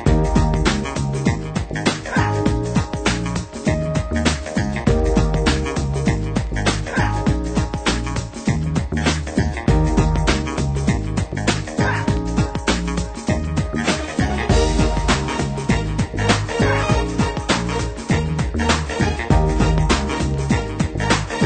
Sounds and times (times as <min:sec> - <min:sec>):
Music: 0:00.0 - 0:21.4.